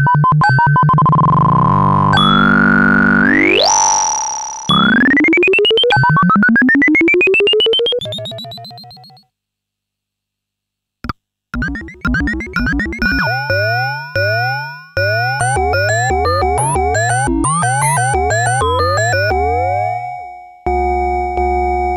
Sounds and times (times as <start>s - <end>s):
Synthesizer: 0.0s - 9.2s, 11.6s - 21.9s.